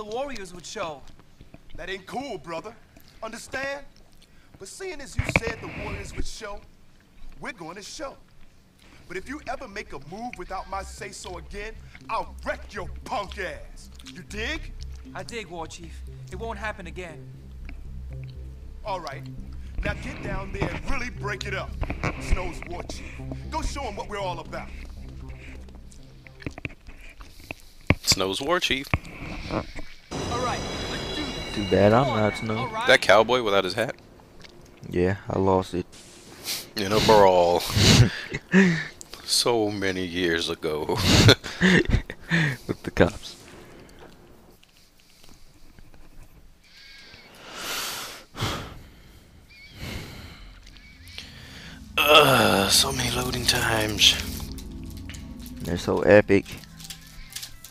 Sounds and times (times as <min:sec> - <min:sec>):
Music: 0:09.2 - 0:27.7, 0:30.1 - 0:42.5, 0:49.8 - 0:57.7.